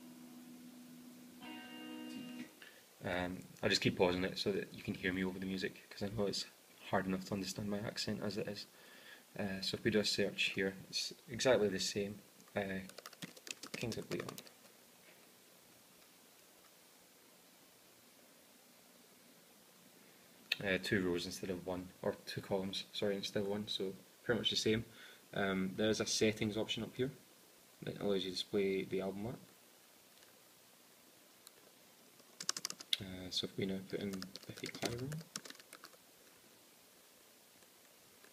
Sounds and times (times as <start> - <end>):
Computer keyboard: 12.8 - 14.7, 32.2 - 33.0, 34.0 - 36.0.